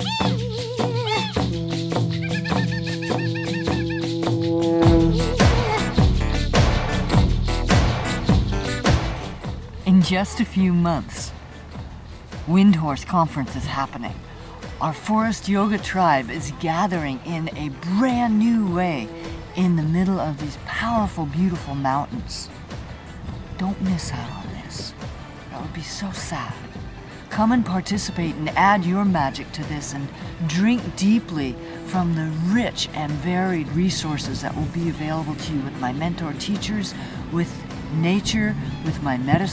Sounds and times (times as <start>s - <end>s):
Music: 0.0s - 39.5s
Speech: 9.8s - 11.4s, 12.5s - 14.2s, 14.8s - 22.5s, 23.6s - 26.7s, 27.3s - 39.5s.